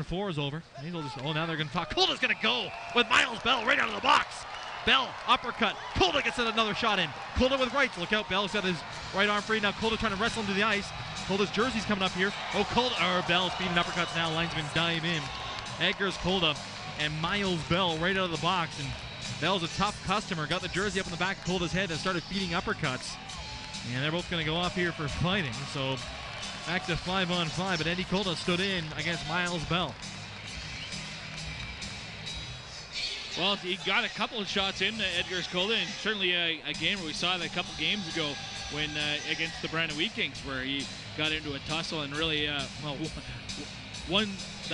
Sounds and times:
Speech: 0:00.0 - 0:23.2, 0:23.9 - 0:26.0, 0:26.7 - 0:30.0, 0:33.4 - 0:43.2, 0:44.1 - 0:44.7.

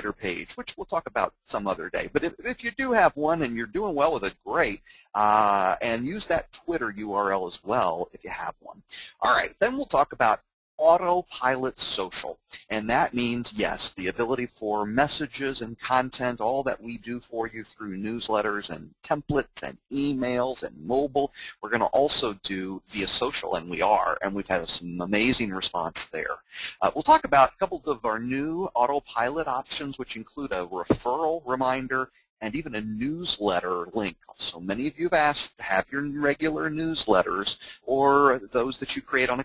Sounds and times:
Speech: 0:00.0 - 0:39.4.

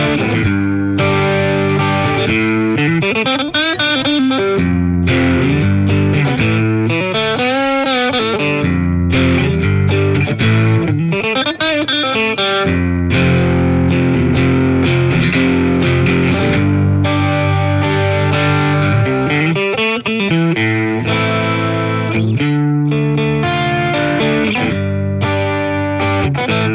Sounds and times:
Effects unit: 0:00.0 - 0:26.7
Music: 0:00.0 - 0:26.7.

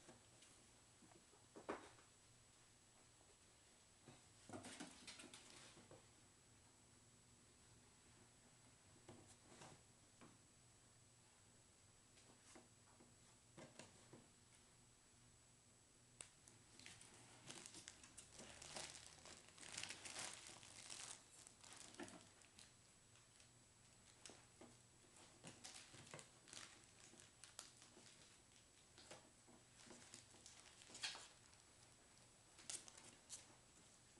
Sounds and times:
Inside, small room: 0:00.0 - 0:34.1.

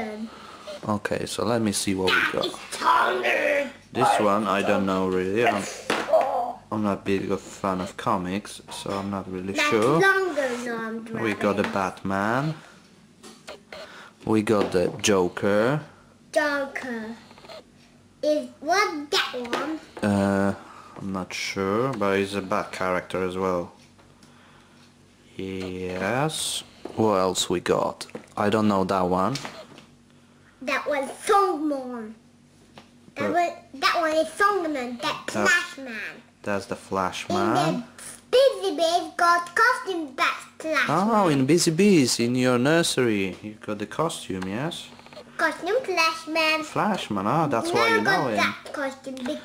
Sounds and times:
Child speech, kid speaking: 0:00.0 - 0:00.4, 0:02.0 - 0:06.6, 0:08.9 - 0:11.8, 0:16.3 - 0:17.3, 0:18.2 - 0:20.0, 0:30.6 - 0:32.2, 0:33.2 - 0:36.3, 0:37.3 - 0:41.5, 0:45.4 - 0:49.4
Inside, small room: 0:00.0 - 0:49.4.

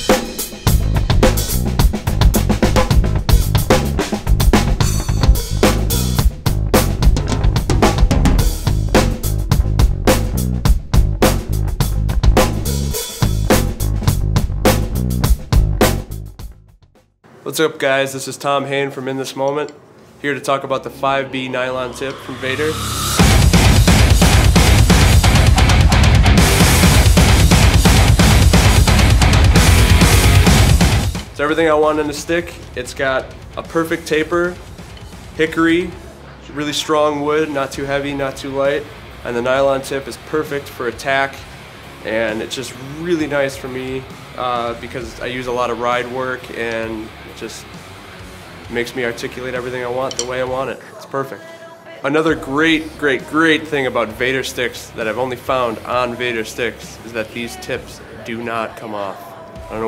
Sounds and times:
Music: 0:00.0 - 0:17.3, 0:20.3 - 0:59.8
Speech: 0:17.4 - 0:22.8, 0:31.4 - 0:34.6, 0:35.4 - 0:41.4, 0:42.0 - 0:47.7, 0:48.7 - 0:59.8.

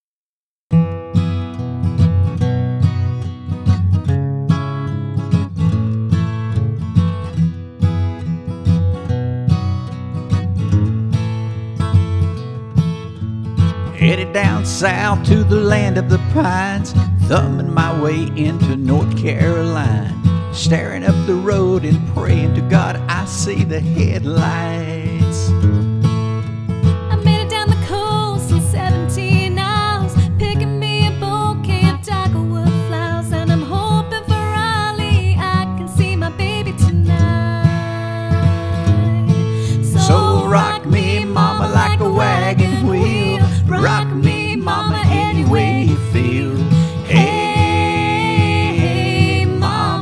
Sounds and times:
Music: 0:00.7 - 0:50.0.

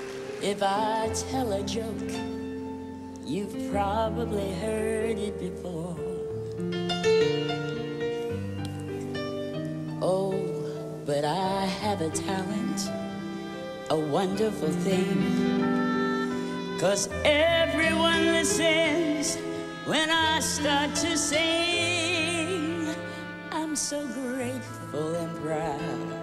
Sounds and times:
Music: 0:00.0 - 0:26.2.

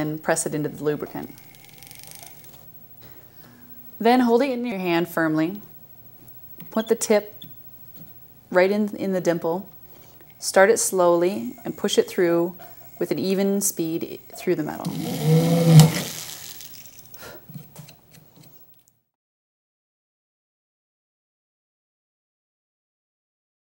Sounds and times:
Speech: 0:00.0 - 0:01.3, 0:04.0 - 0:05.6, 0:06.7 - 0:07.3, 0:08.5 - 0:09.7, 0:10.4 - 0:15.0
Drill: 0:14.9 - 0:16.8.

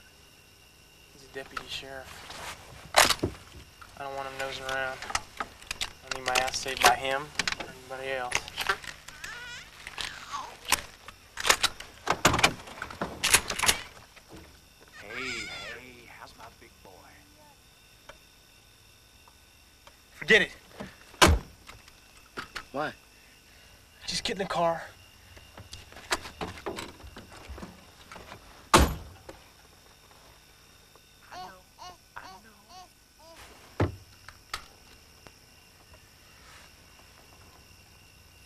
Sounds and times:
Speech: 0:15.0 - 0:17.6.

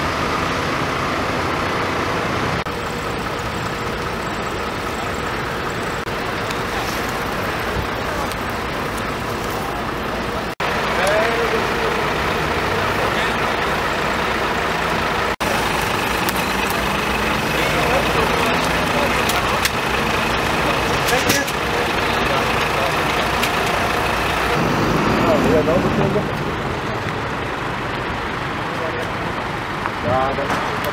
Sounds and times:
Vehicle: 0:00.0 - 0:30.9
Speech: 0:10.9 - 0:13.8, 0:17.3 - 0:23.8, 0:25.2 - 0:27.2, 0:30.0 - 0:30.9.

